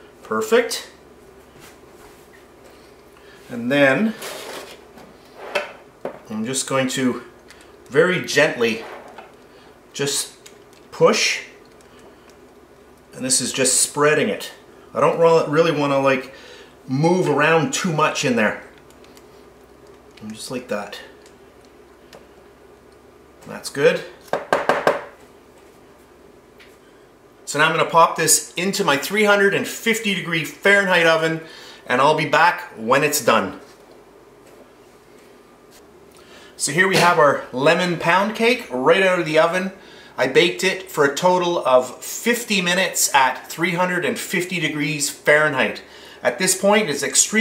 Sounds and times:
Speech: 0.3s - 1.0s, 3.5s - 4.2s, 6.3s - 7.3s, 7.9s - 8.9s, 10.0s - 11.6s, 13.1s - 18.7s, 20.2s - 21.2s, 23.4s - 24.2s, 27.5s - 33.7s, 36.6s - 47.4s.

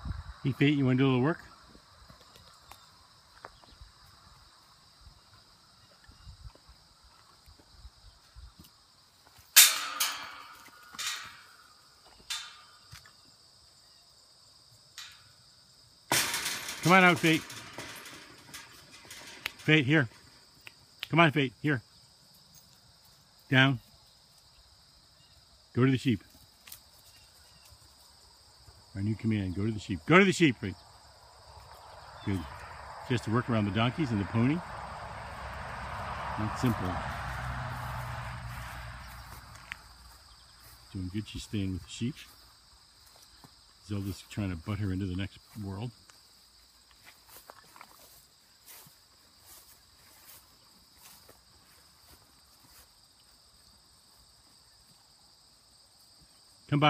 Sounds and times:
Environmental noise: 0.0s - 56.8s
Outside, rural or natural: 0.0s - 56.8s
Speech: 0.4s - 1.6s, 16.8s - 17.6s, 19.6s - 20.2s, 21.1s - 21.8s, 23.5s - 23.8s, 25.7s - 26.3s, 28.9s - 30.8s, 32.2s - 34.6s, 36.4s - 37.0s, 40.9s - 42.3s, 43.8s - 46.0s, 56.7s - 56.8s.

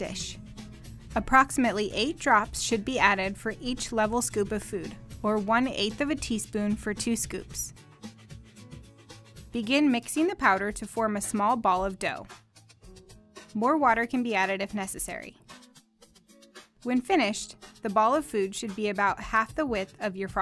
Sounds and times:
Speech: 0.0s - 0.4s, 1.2s - 7.7s, 9.6s - 12.3s, 13.6s - 15.4s, 16.8s - 20.4s
Music: 0.0s - 20.4s.

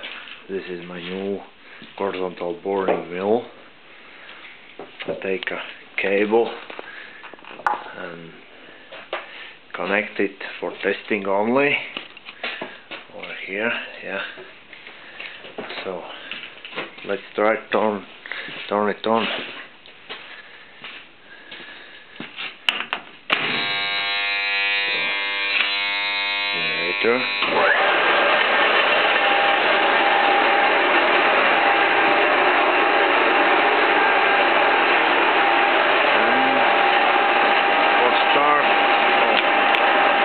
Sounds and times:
Speech: 0.5s - 3.6s, 5.1s - 6.6s, 7.9s - 8.4s, 9.7s - 11.9s, 13.1s - 14.4s, 15.7s - 16.2s, 17.0s - 18.1s, 18.7s - 19.5s, 26.6s - 27.3s, 36.2s - 36.7s, 38.0s - 39.5s.

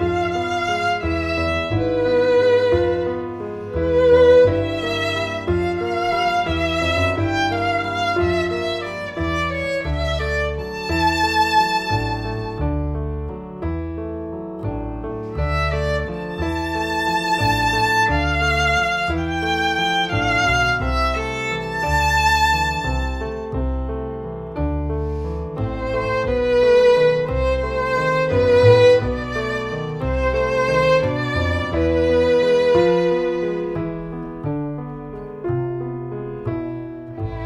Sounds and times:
Violin, fiddle: 0.0s - 12.8s, 15.2s - 23.7s, 25.0s - 34.3s, 37.2s - 37.4s.

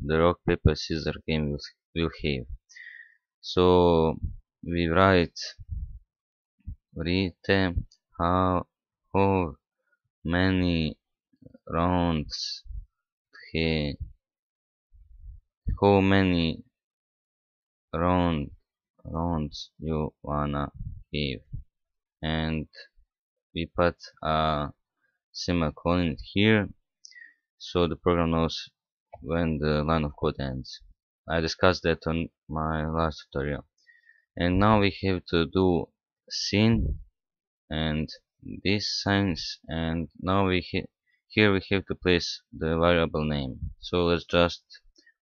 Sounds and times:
Speech: 0.0s - 2.6s, 3.4s - 6.0s, 6.7s - 9.6s, 10.3s - 12.8s, 13.4s - 14.2s, 15.7s - 16.7s, 18.0s - 21.6s, 22.2s - 23.0s, 23.6s - 24.8s, 25.4s - 33.7s, 34.4s - 37.1s, 37.7s - 44.9s.

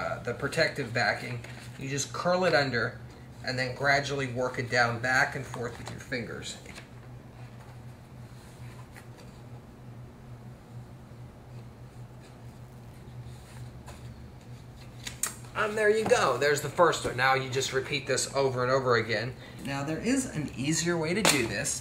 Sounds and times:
Speech: 0.0s - 6.7s, 15.6s - 21.8s.

